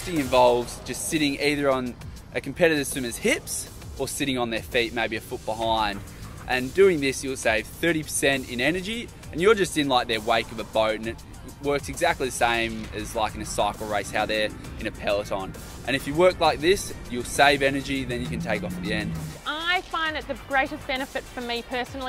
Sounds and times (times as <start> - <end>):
Music: 0.0 - 22.0
Speech: 0.0 - 22.0.